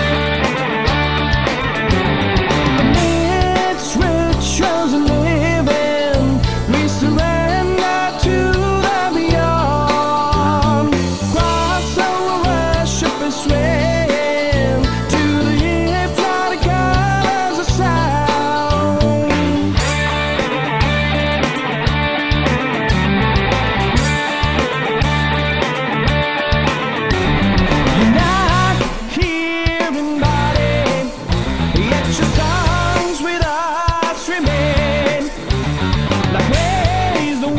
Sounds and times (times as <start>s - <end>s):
Music: 0.0s - 37.5s.